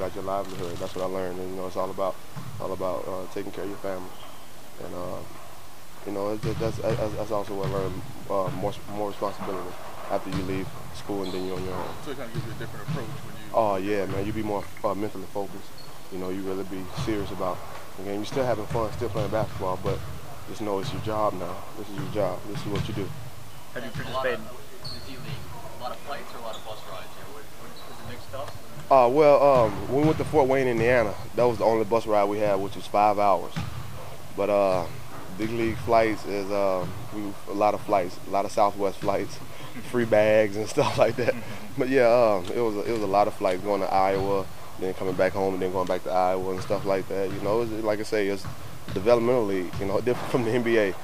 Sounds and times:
Speech: 0:00.0 - 0:04.1, 0:06.1 - 0:23.1, 0:34.4 - 0:51.0
Basketball bounce: 0:06.4 - 0:08.8, 0:33.5 - 0:34.1, 0:48.4 - 0:50.4.

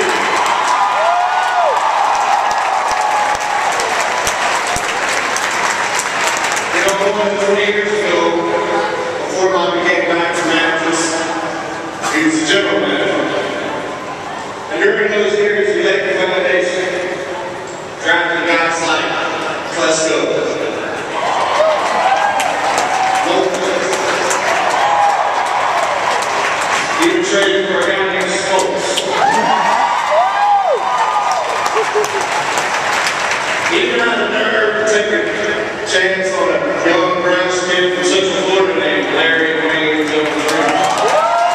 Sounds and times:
Male speech, man speaking: 0:06.7 - 0:11.4, 0:12.1 - 0:13.5, 0:14.7 - 0:17.2, 0:18.0 - 0:20.8, 0:23.2 - 0:24.3, 0:27.0 - 0:29.2, 0:33.7 - 0:41.0.

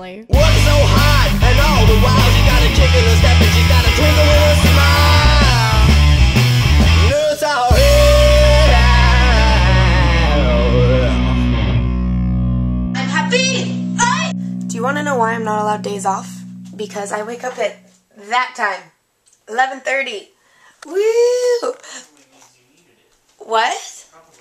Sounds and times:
Speech: 0:00.0 - 0:00.3, 0:20.9 - 0:24.4
Music: 0:00.3 - 0:18.0.

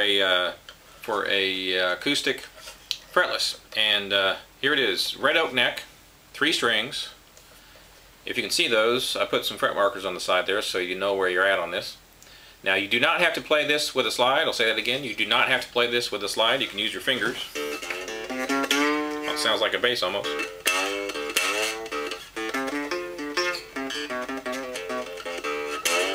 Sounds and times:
Speech: 0:00.0 - 0:07.2, 0:08.2 - 0:12.0, 0:12.6 - 0:17.6, 0:19.3 - 0:20.4.

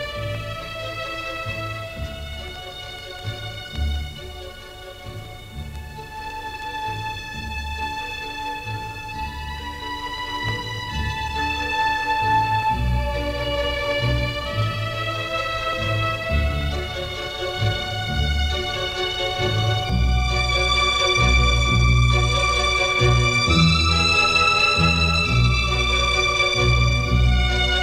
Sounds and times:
Tender music: 0:00.0 - 0:27.8.

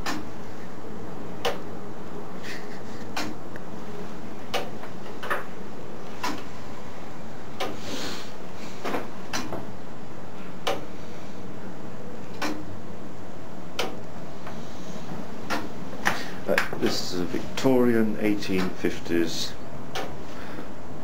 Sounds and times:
Speech: 0:16.5 - 0:19.6.

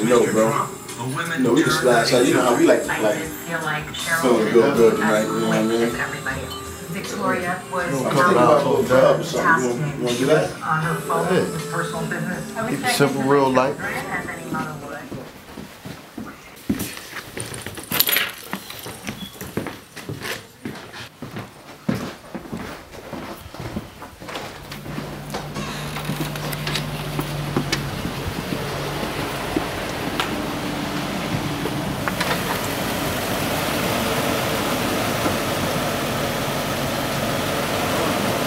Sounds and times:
Music: 0:00.0 - 0:15.0
Speech: 0:00.0 - 0:15.3.

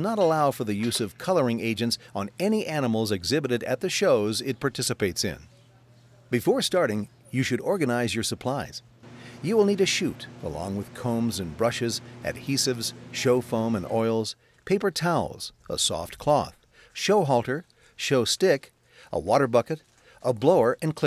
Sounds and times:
Speech: 0:00.0 - 0:08.8, 0:09.4 - 0:21.0.

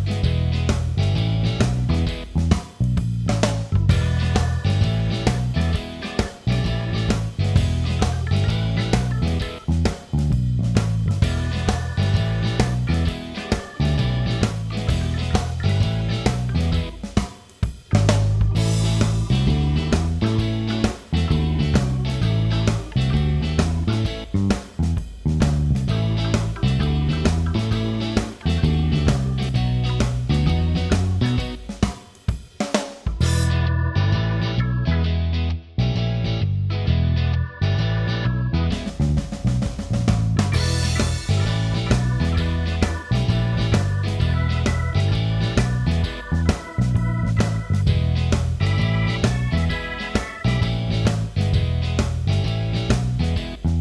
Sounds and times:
Music: 0:00.0 - 0:53.8.

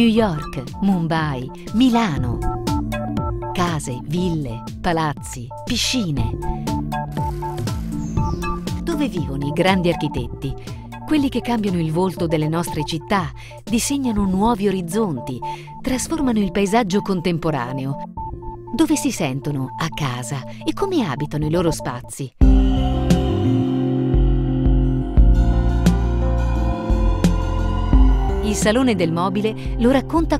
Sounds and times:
Speech: 0:00.0 - 0:02.4, 0:03.6 - 0:06.4, 0:08.9 - 0:18.0, 0:18.8 - 0:22.4, 0:28.5 - 0:30.3
Music: 0:00.0 - 0:30.3.

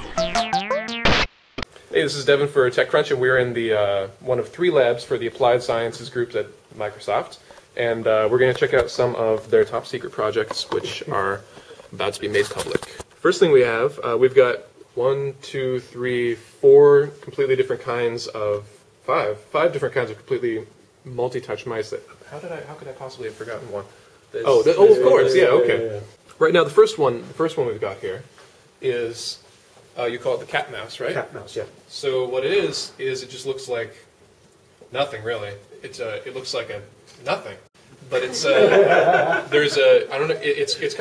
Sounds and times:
Speech: 0:01.9 - 0:29.4, 0:30.0 - 0:34.1, 0:34.9 - 0:38.8, 0:39.4 - 0:41.0.

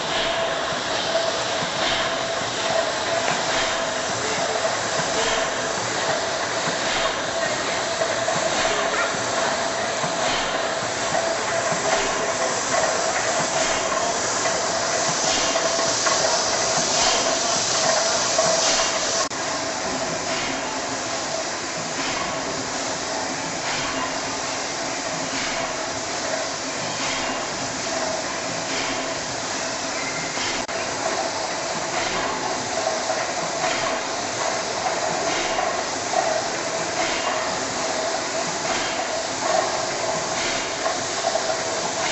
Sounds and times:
Heavy engine (low frequency): 0:00.0 - 0:42.1.

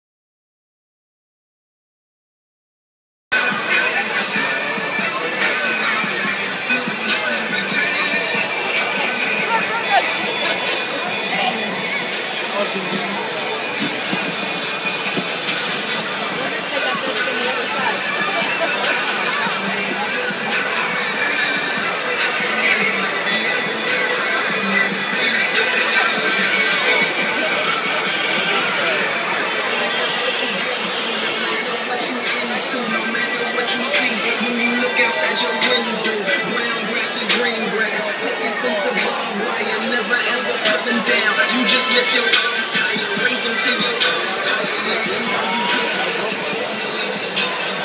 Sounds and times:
Hubbub, speech noise, speech babble: 0:03.3 - 0:47.8
Music: 0:03.3 - 0:47.8
Inside, large room or hall: 0:03.4 - 0:47.8.

